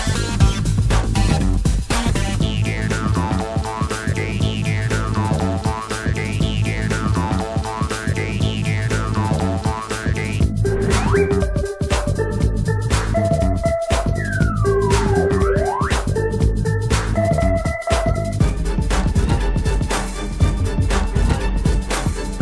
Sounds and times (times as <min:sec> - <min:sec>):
Sampler: 0:02.0 - 0:19.4.